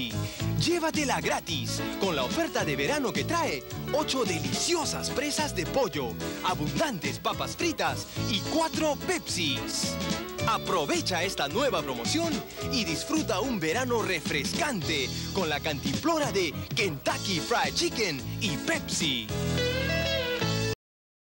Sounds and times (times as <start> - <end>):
Speech: 0.0 - 19.3
Music: 0.0 - 20.8.